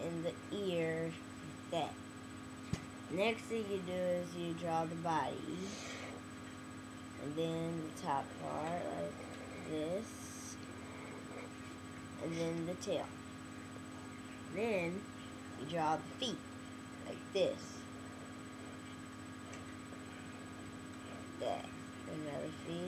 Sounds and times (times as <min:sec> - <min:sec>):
Speech: 0:00.0 - 0:02.0, 0:03.1 - 0:05.9, 0:07.2 - 0:10.6, 0:12.2 - 0:13.1, 0:14.5 - 0:16.4, 0:17.1 - 0:17.8, 0:21.4 - 0:22.8.